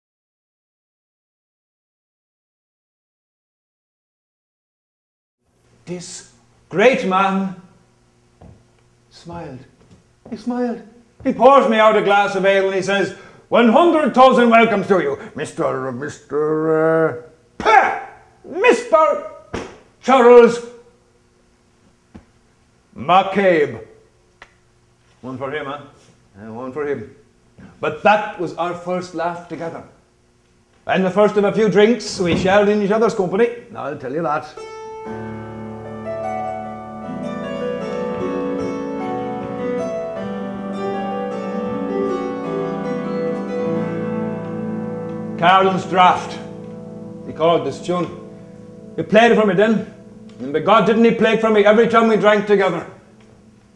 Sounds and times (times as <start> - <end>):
Speech: 5.9 - 7.7, 9.1 - 9.7, 10.3 - 20.8, 23.0 - 24.0, 25.2 - 27.2, 27.8 - 30.0, 30.9 - 34.6, 45.4 - 46.5, 47.3 - 48.2, 49.0 - 53.0
Folk music: 34.6 - 53.2.